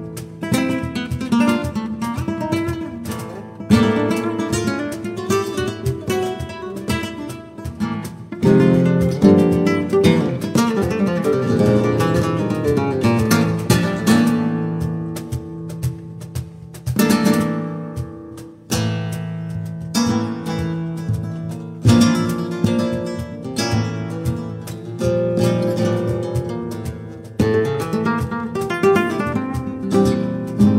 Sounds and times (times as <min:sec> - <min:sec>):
Flamenco: 0:00.0 - 0:30.7
Strum: 0:00.0 - 0:30.7.